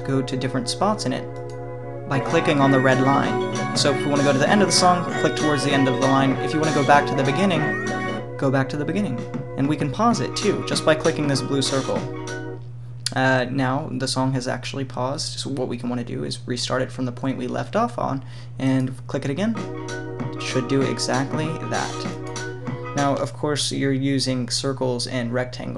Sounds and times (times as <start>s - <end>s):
Speech: 0.0s - 1.2s, 2.1s - 7.8s, 8.4s - 12.1s, 13.1s - 19.6s, 20.4s - 22.1s, 23.0s - 25.7s
Music: 0.0s - 12.7s, 19.4s - 23.6s.